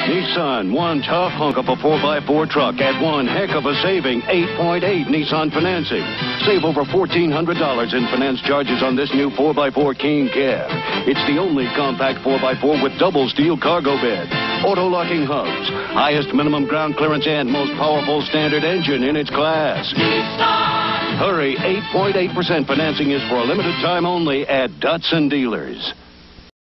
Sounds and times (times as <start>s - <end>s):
Speech: 0.0s - 19.9s, 21.2s - 26.0s
Music: 0.0s - 26.0s.